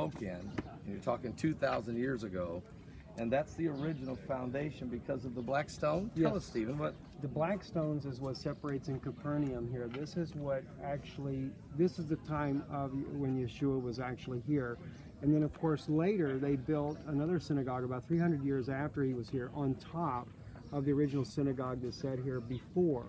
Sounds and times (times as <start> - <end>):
Speech: 0.0 - 23.0.